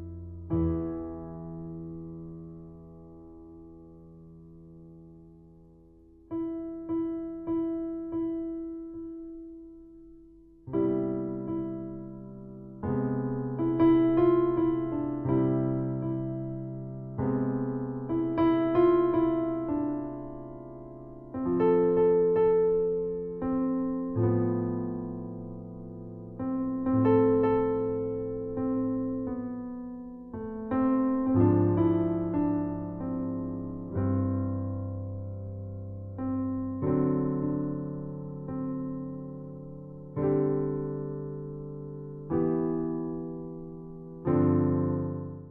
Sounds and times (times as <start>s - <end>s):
Electric piano: 0.0s - 45.5s.